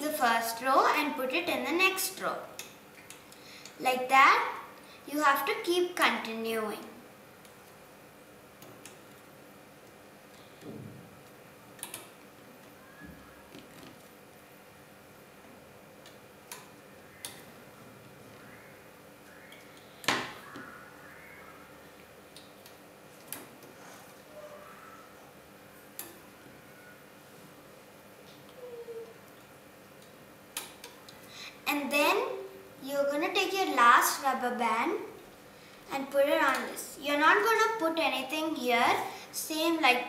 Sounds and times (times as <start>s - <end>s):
Inside, small room: 0.0s - 40.0s.